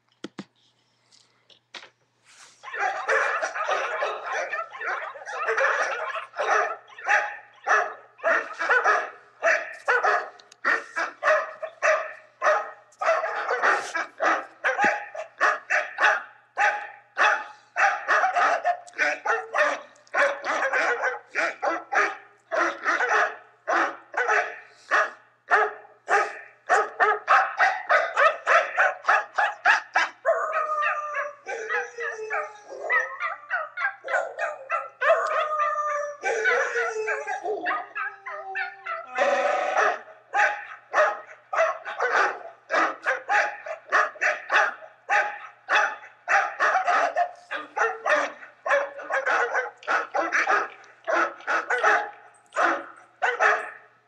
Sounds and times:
Bark: 2.6 - 54.0.

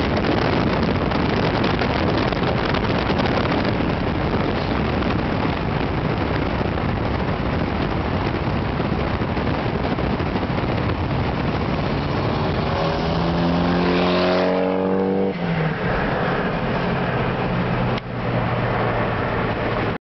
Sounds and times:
Car: 0.0 - 20.0
Accelerating, revving, vroom: 11.8 - 20.0.

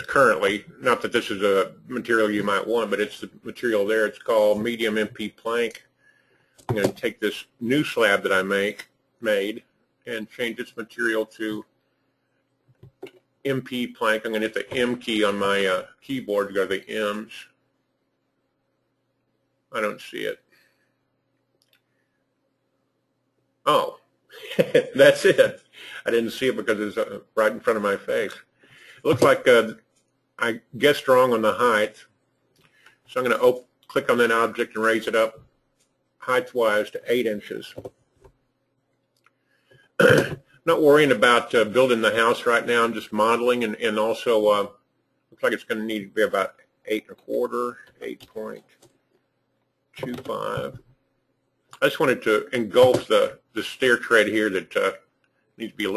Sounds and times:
Speech: 0.0 - 5.9, 6.7 - 11.7, 13.0 - 17.6, 19.7 - 20.5, 23.6 - 29.8, 30.4 - 32.1, 33.1 - 35.5, 36.2 - 37.9, 40.0 - 44.8, 45.4 - 48.7, 50.0 - 50.8, 51.8 - 55.9
Inside, small room: 0.0 - 55.9.

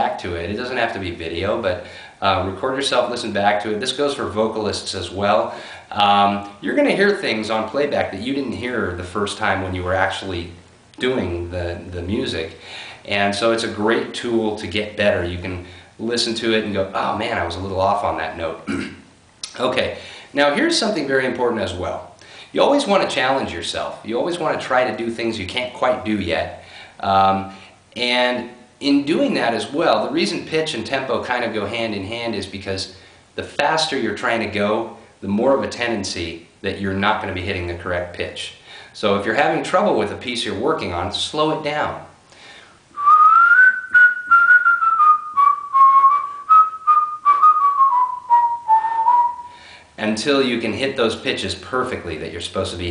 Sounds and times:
Whistling: 43.0 - 49.6.

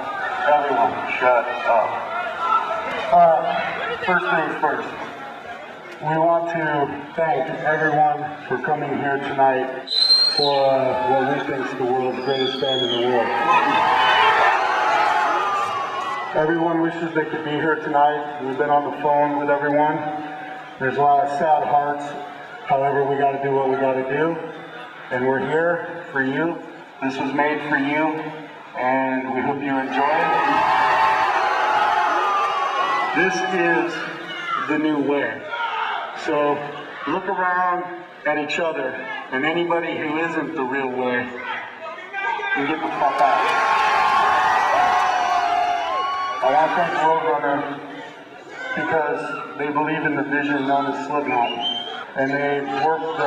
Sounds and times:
Male speech, man speaking: 0.4 - 2.0, 3.1 - 5.0, 6.0 - 13.4, 16.4 - 20.2, 20.8 - 24.5, 25.1 - 30.6, 33.2 - 43.4, 46.4 - 47.9, 48.6 - 53.2
Narration, monologue: 5.9 - 13.3, 16.3 - 30.4, 36.2 - 43.4, 46.4 - 53.2.

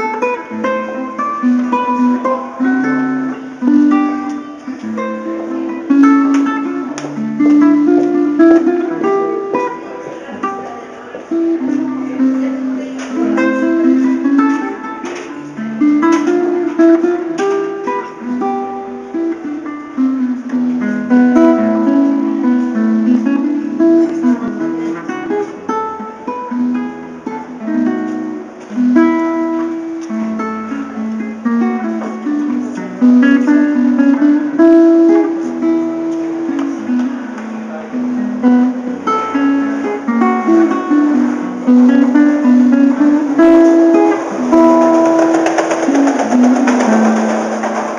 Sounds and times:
Ukulele: 0.0 - 47.9.

